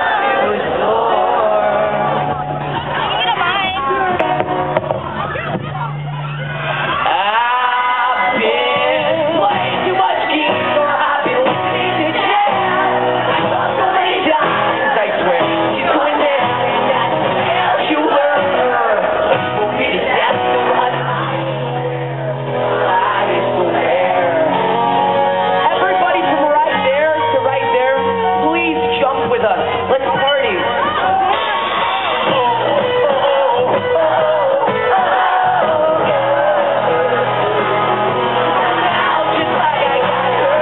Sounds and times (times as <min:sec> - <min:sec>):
Music: 0:00.0 - 0:40.6.